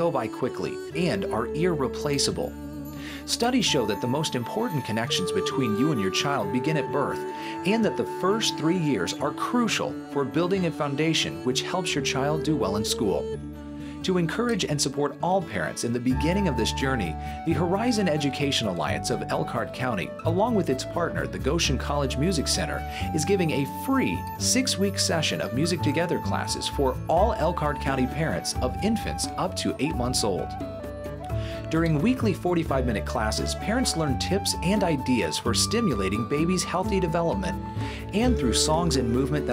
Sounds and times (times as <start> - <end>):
Speech: 0.0 - 2.5, 3.3 - 13.3, 14.0 - 30.6, 31.6 - 39.5
Music: 0.0 - 39.5.